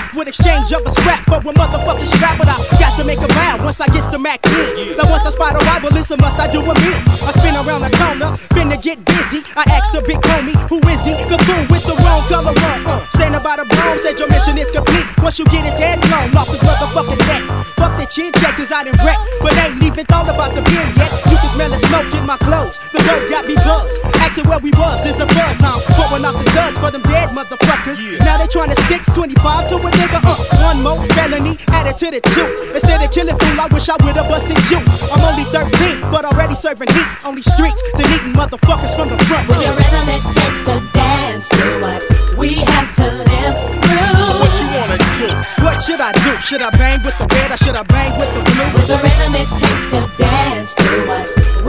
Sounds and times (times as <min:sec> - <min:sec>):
Music: 0:00.0 - 0:51.6
Rapping: 0:00.0 - 0:51.6.